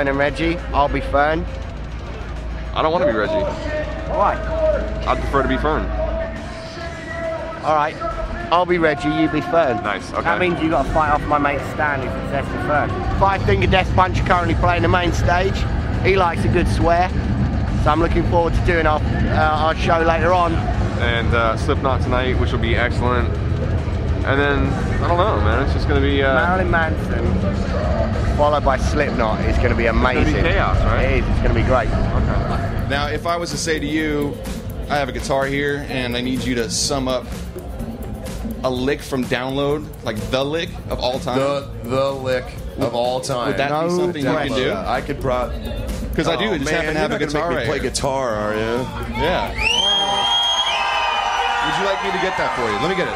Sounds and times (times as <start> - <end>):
Speech: 0.0 - 1.4, 2.7 - 17.1, 28.4 - 37.3, 38.6 - 49.6
Music: 0.0 - 53.1.